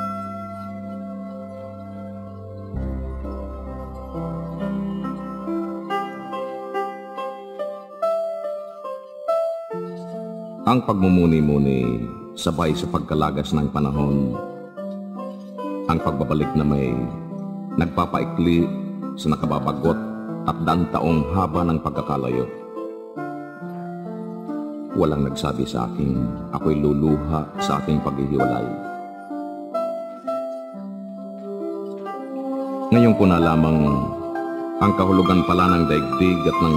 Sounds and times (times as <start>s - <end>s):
Music: 0.0s - 36.7s.